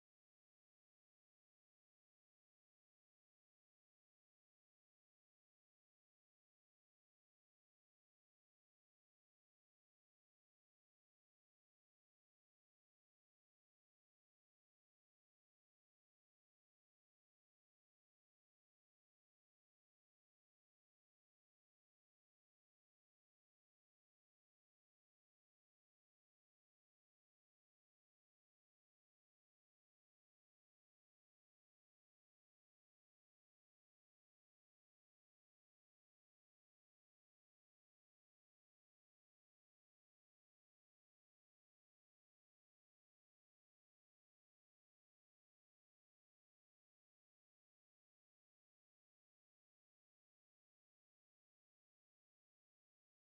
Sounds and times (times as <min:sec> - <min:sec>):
Silence: 0:00.0 - 0:53.3.